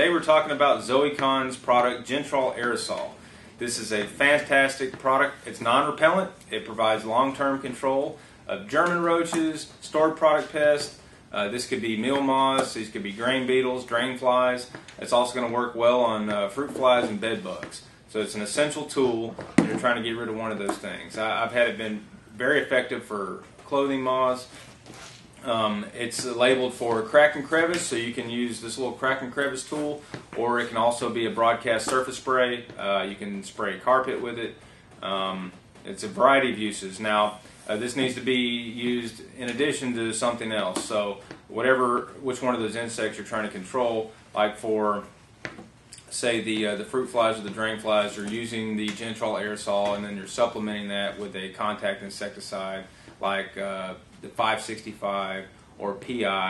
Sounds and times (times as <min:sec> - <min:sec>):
Speech: 0:00.0 - 0:24.5, 0:25.4 - 0:45.2, 0:45.9 - 0:56.4.